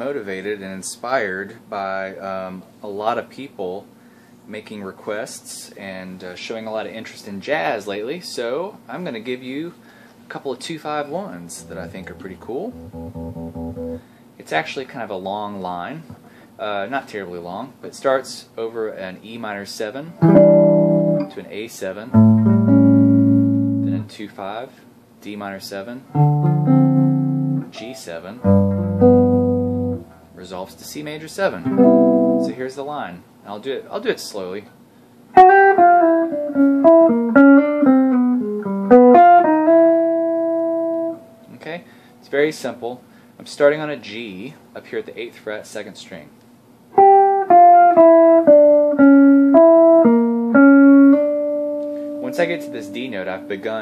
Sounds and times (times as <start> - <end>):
Speech: 0.0 - 3.9, 4.5 - 12.8, 14.4 - 20.2, 21.2 - 22.2, 23.9 - 26.1, 27.7 - 28.5, 30.4 - 31.7, 32.4 - 34.8, 41.5 - 46.4, 52.2 - 53.8
Strum: 11.4 - 14.0, 20.2 - 21.4, 22.2 - 24.1, 26.2 - 32.6, 47.0 - 53.8
Electric guitar: 11.6 - 14.0, 20.2 - 21.3, 22.2 - 24.1, 26.2 - 27.7, 28.4 - 30.4, 31.6 - 32.6, 35.4 - 41.3, 47.0 - 53.8.